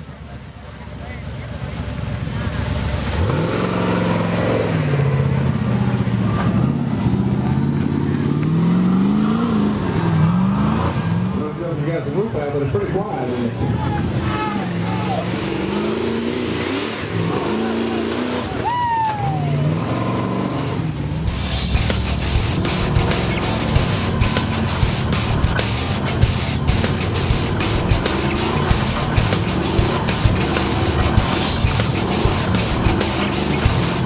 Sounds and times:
Race car, auto racing: 0.0 - 34.0
Speech: 11.4 - 15.3.

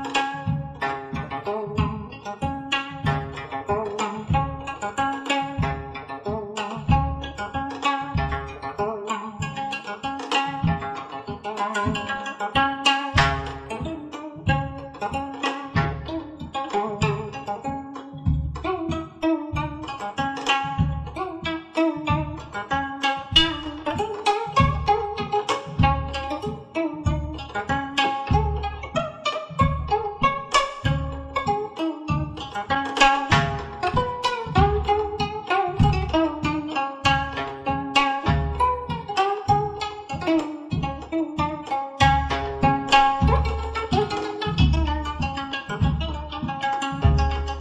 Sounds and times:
Pizzicato: 0.0 - 47.6
Zither: 0.0 - 47.6.

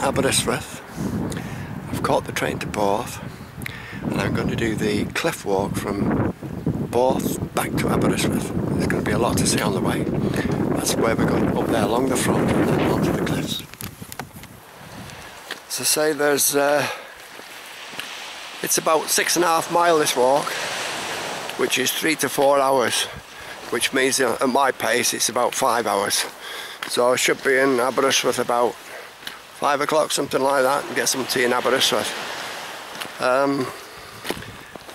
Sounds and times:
Speech: 0.0 - 0.8, 1.9 - 3.3, 4.1 - 6.1, 6.9 - 10.1, 10.8 - 13.7, 15.7 - 17.0, 18.6 - 20.6, 21.6 - 26.3, 26.9 - 28.8, 29.6 - 32.2, 33.2 - 33.8.

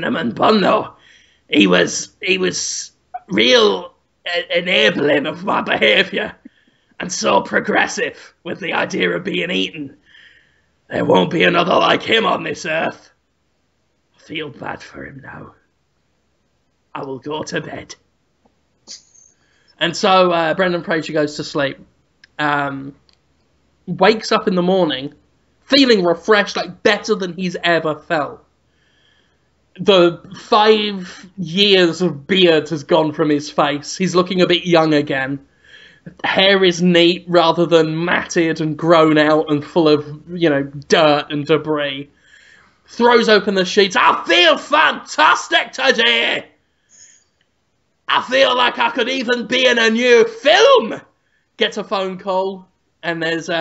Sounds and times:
Narration, monologue: 0.0 - 53.6.

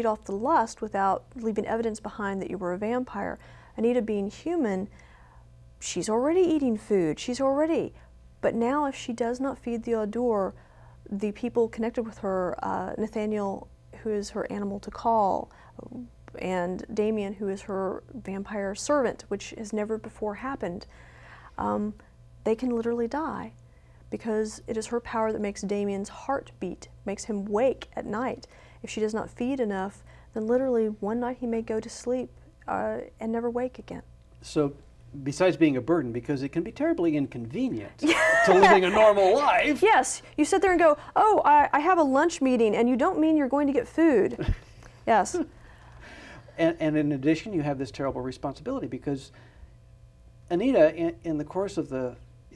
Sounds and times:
Inside, small room: 0.0 - 52.5.

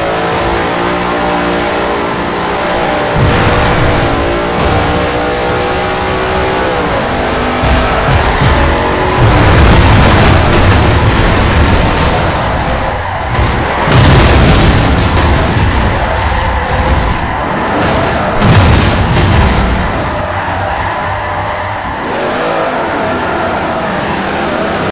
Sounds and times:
Skidding: 0.0 - 24.9.

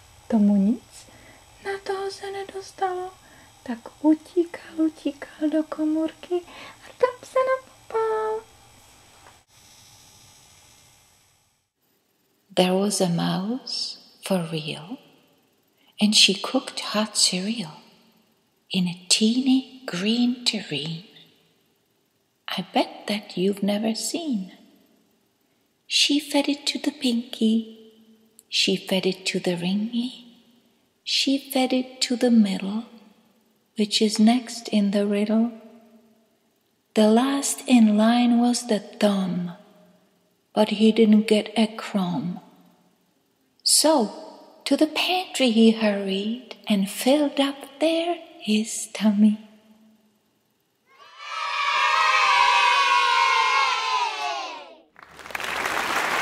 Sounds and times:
Speech: 0.3 - 8.5, 12.5 - 15.0, 16.0 - 17.9, 18.7 - 21.2, 22.5 - 24.6, 25.9 - 27.8, 28.5 - 30.3, 31.1 - 33.0, 33.8 - 35.7, 36.9 - 39.7, 40.5 - 42.5, 43.6 - 49.5.

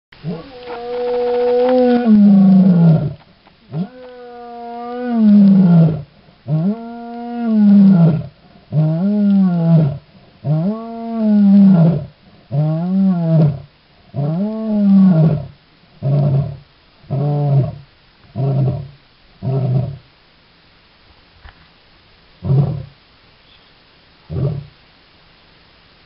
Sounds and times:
Canidae, dogs, wolves: 0.2 - 1.8
Roar: 0.2 - 20.0, 22.4 - 23.0, 24.3 - 24.8.

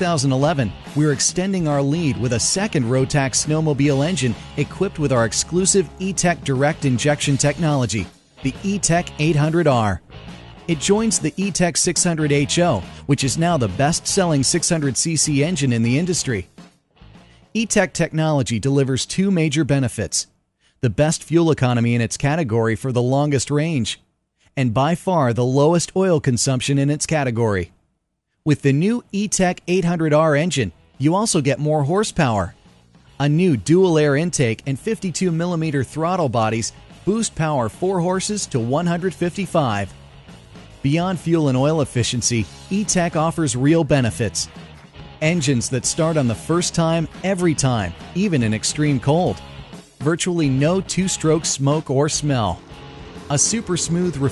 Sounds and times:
Speech: 0.0 - 10.0, 10.7 - 16.5, 17.6 - 24.0, 24.6 - 27.8, 28.5 - 32.6, 33.2 - 40.0, 40.8 - 44.5, 45.2 - 49.4, 50.0 - 52.6, 53.3 - 54.3.

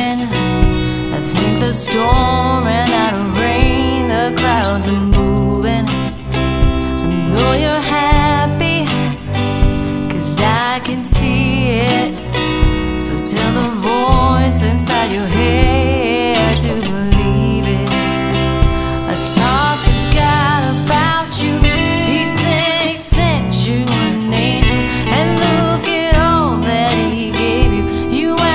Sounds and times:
Blues: 0.0 - 28.5.

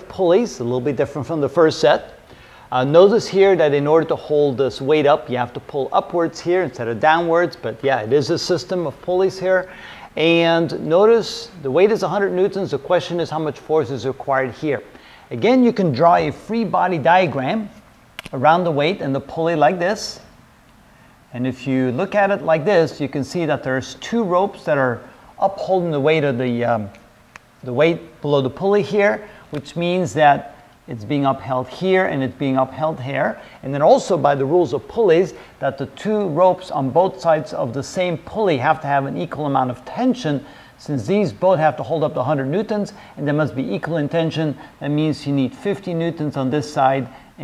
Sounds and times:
Speech: 0.0 - 20.3, 21.3 - 47.4.

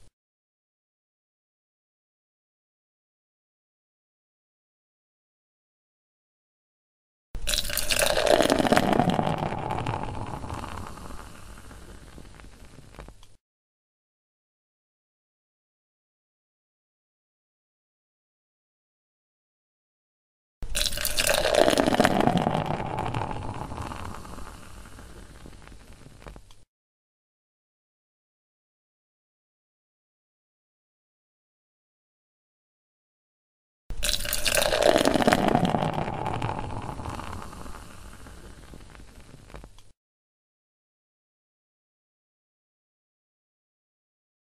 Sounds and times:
Pour: 7.4 - 12.7, 20.6 - 26.1, 33.9 - 39.4.

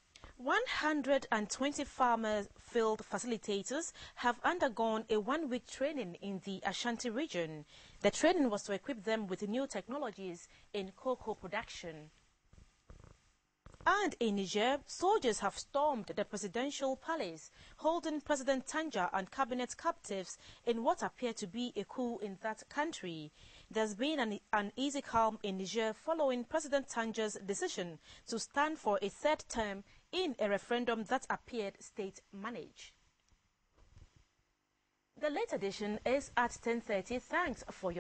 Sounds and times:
Speech: 0.4 - 12.1, 13.9 - 33.0, 35.2 - 38.0.

